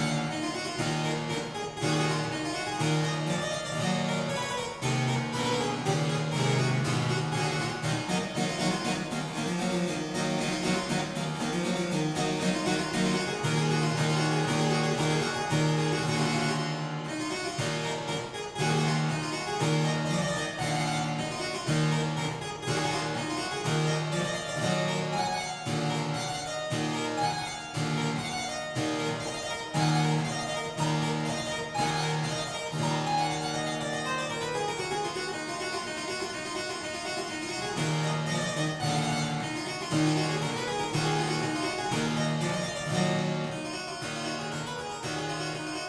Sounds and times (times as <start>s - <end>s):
Harpsichord: 0.0s - 45.8s.